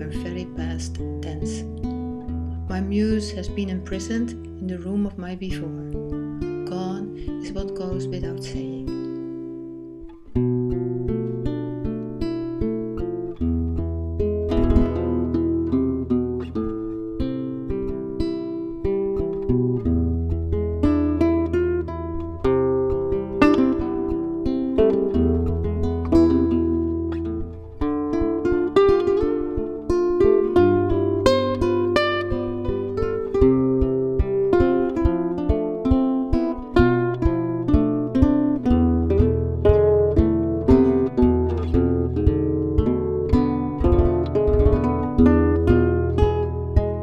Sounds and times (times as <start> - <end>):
Speech: 0.0 - 1.7, 2.7 - 5.9, 6.6 - 9.0
Music: 0.0 - 47.0.